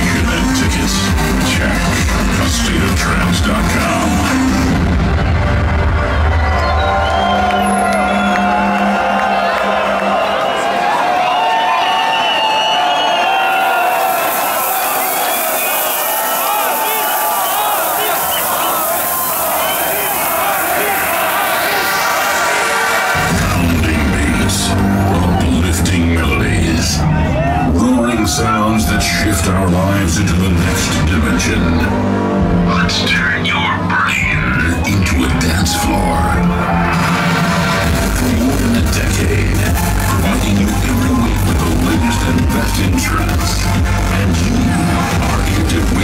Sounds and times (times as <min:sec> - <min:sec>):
Music: 0:00.0 - 0:46.0
Clapping: 0:07.1 - 0:11.2.